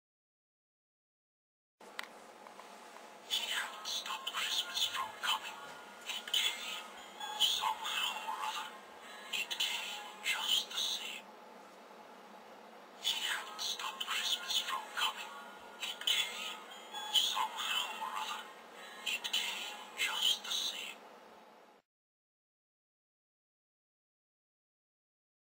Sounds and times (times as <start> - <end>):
Music: 3.2 - 11.3, 13.0 - 21.8
Speech: 3.3 - 8.8, 9.4 - 11.2, 13.0 - 16.6, 17.2 - 18.5, 19.1 - 21.0.